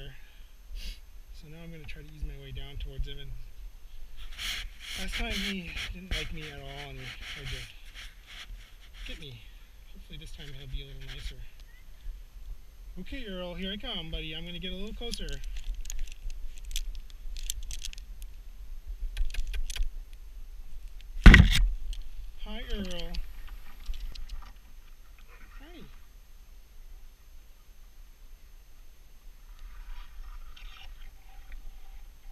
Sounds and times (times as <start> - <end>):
Speech: 1.4 - 3.4, 5.0 - 7.8, 9.0 - 11.5, 13.0 - 15.5, 22.4 - 23.2, 25.4 - 26.0.